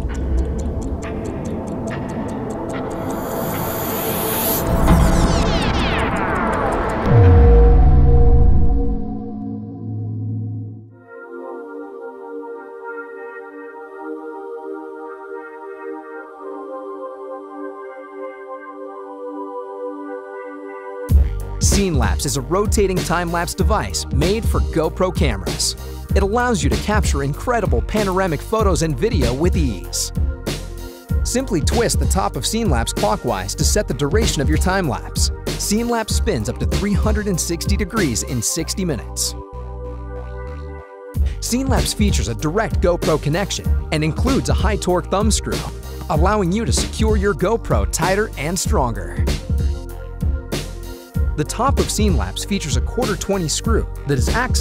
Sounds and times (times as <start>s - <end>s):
Music: 0.0s - 54.6s.